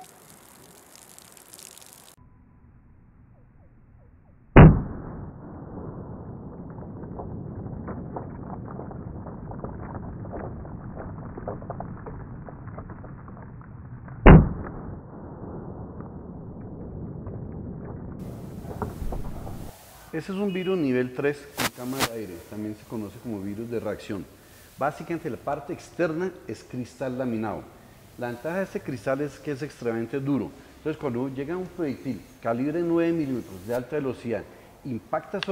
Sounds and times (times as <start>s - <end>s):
Burst, pop: 4.6s - 18.0s, 21.6s - 22.2s.